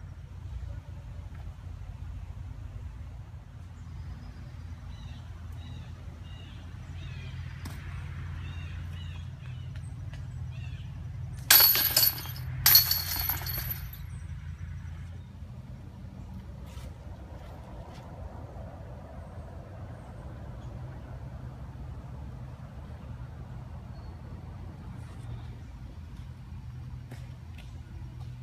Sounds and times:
Outside, rural or natural: 0.0 - 28.4.

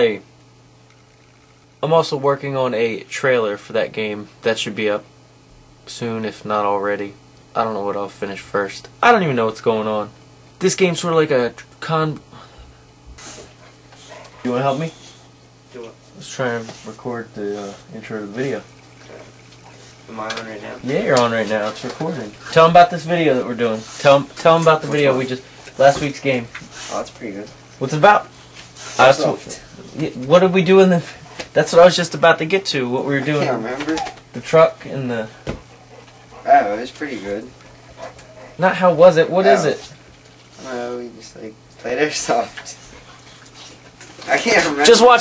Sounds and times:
Speech: 0.0 - 0.2, 1.8 - 5.1, 5.8 - 12.2, 14.4 - 15.0, 15.7 - 18.7, 20.1 - 28.3, 29.0 - 35.4, 36.4 - 37.5, 38.6 - 39.9, 40.6 - 42.8, 44.2 - 45.2.

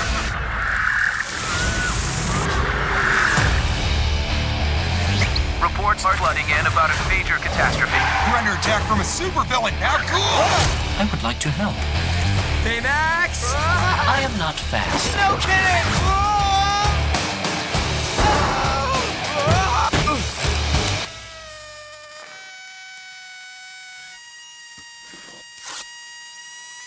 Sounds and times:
Music: 1.3 - 21.1
Speech: 5.6 - 11.8, 12.6 - 16.9.

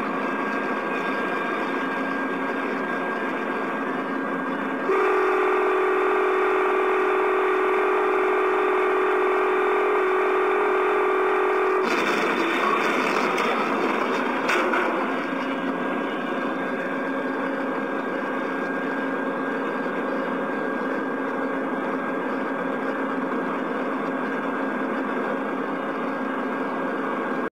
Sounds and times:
Vehicle: 0.0 - 27.5.

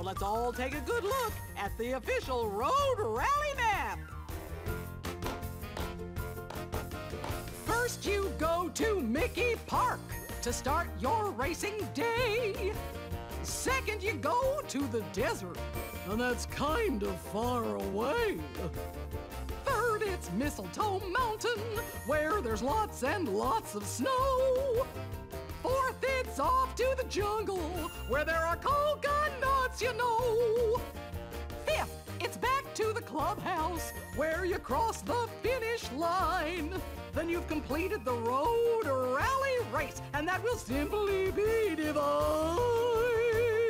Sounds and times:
Speech: 0.0 - 4.0, 7.7 - 12.8, 13.4 - 18.7, 19.7 - 24.8, 25.6 - 30.8, 31.7 - 42.8
Music: 0.0 - 43.6.

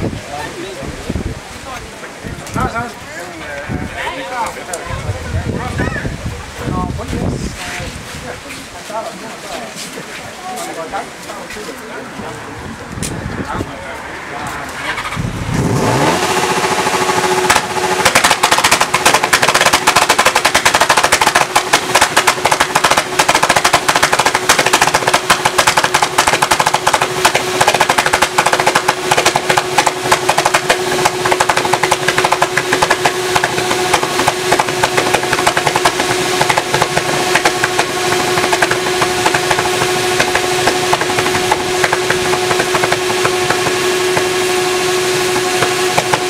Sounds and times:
Idling: 14.8 - 46.3.

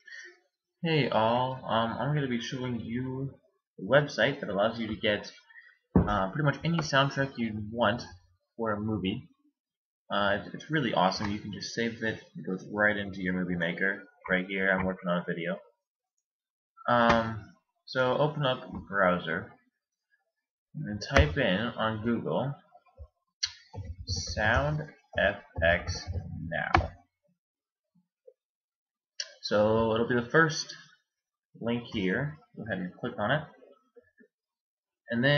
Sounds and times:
Speech: 0.8 - 9.4, 10.1 - 15.8, 16.8 - 19.6, 20.8 - 22.7, 24.0 - 27.0, 29.2 - 30.9, 31.6 - 33.8, 35.1 - 35.3.

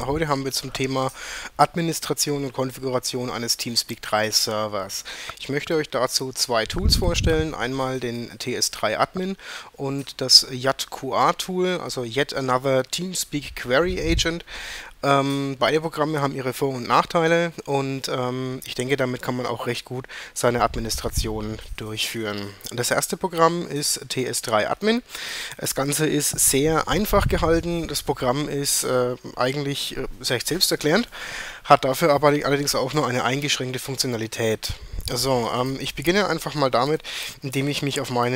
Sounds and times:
Speech: 0.0 - 31.1, 31.7 - 38.3.

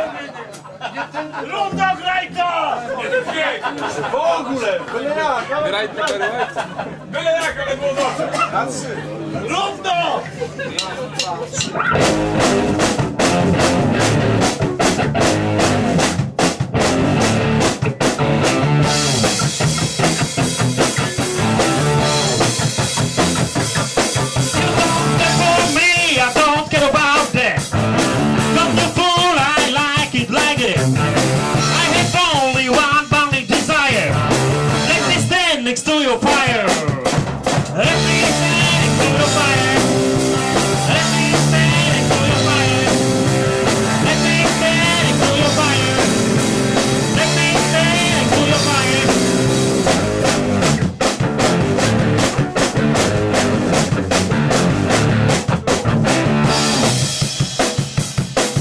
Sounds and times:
Blues: 10.3 - 58.6.

